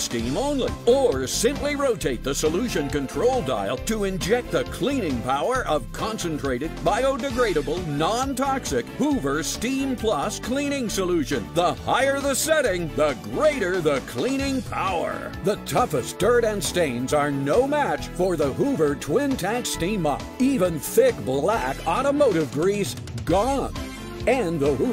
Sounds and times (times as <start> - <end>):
Music: 0.0 - 24.9
Speech: 0.0 - 24.9.